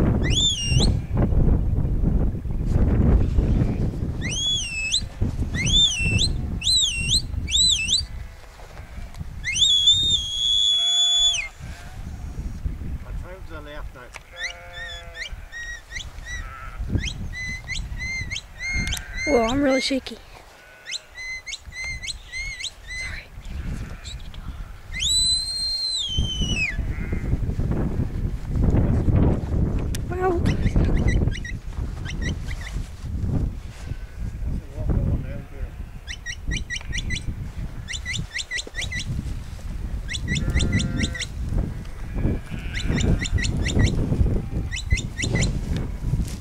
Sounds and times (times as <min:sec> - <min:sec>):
Sheep: 0:14.2 - 0:27.4, 0:35.3 - 0:46.4.